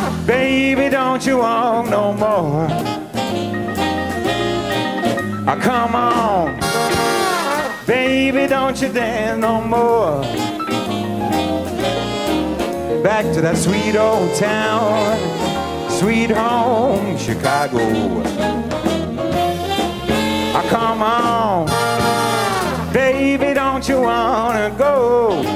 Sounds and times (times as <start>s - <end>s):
Saxophone: 0.0s - 1.1s, 2.4s - 8.1s, 9.9s - 23.2s, 25.0s - 25.5s
Jazz: 0.0s - 25.5s
Orchestra: 0.0s - 25.5s
Trombone: 0.0s - 25.5s
Trumpet: 0.0s - 25.5s.